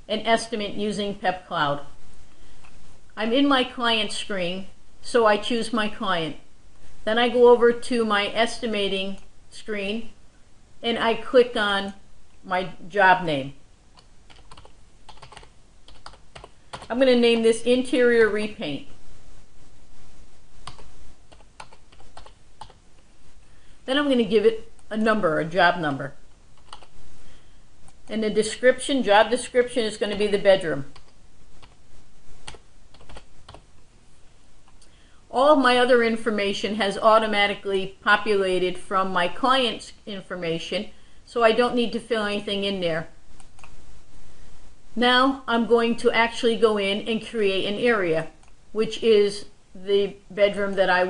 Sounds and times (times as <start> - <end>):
Speech: 0.1 - 2.0, 3.2 - 10.2, 10.8 - 13.6, 16.9 - 19.0, 23.9 - 26.2, 28.1 - 31.0, 35.3 - 43.2, 45.0 - 51.1
Computer keyboard: 14.0 - 16.9, 20.6 - 22.8, 26.6 - 26.9, 32.4 - 33.6.